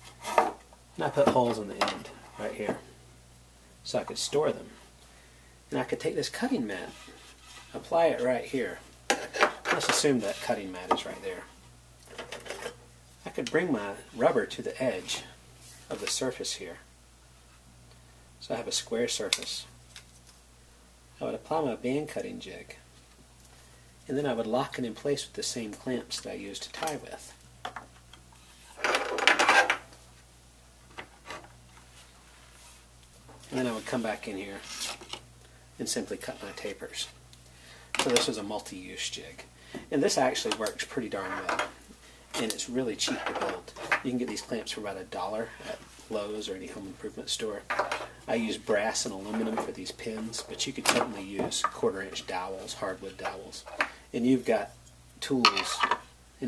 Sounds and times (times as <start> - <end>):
Inside, small room: 0.0 - 56.4
Speech: 1.0 - 2.9, 3.8 - 4.8, 5.7 - 8.9, 9.7 - 11.6, 13.2 - 16.9, 18.4 - 19.8, 21.2 - 22.9, 24.1 - 27.4, 33.5 - 34.8, 35.8 - 37.2, 38.0 - 56.4.